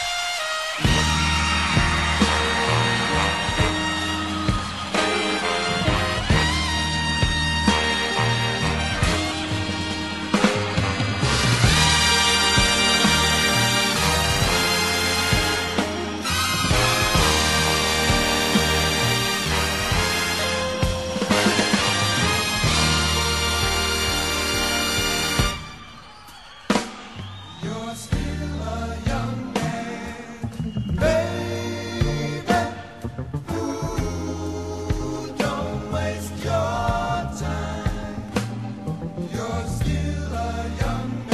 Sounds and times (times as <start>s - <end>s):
Choir: 1.6s - 6.7s, 11.7s - 20.7s, 27.5s - 41.3s
Male singing: 27.6s - 32.8s, 33.5s - 38.3s, 39.3s - 41.3s.